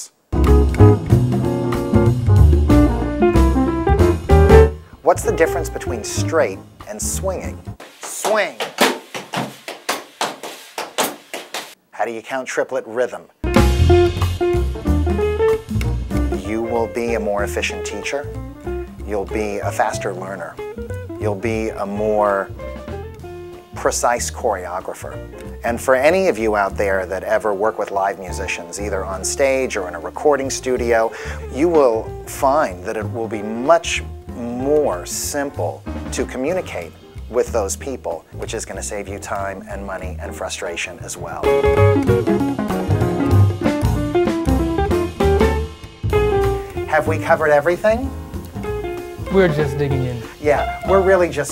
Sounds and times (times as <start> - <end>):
Music: 0.3 - 7.8, 13.4 - 51.5
Speech: 5.0 - 8.7, 11.9 - 13.3, 16.4 - 18.3, 19.0 - 20.6, 21.2 - 22.5, 23.8 - 41.5, 46.9 - 48.1, 49.3 - 51.5.